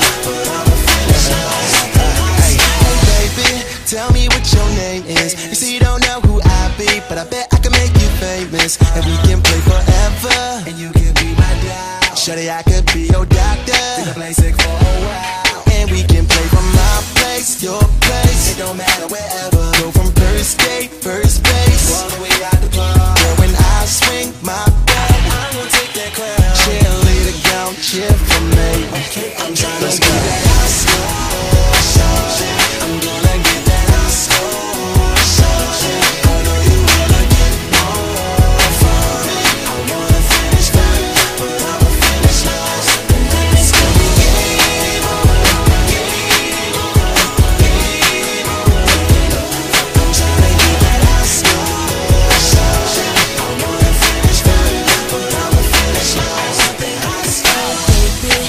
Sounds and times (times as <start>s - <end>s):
Funk: 0.0s - 58.4s.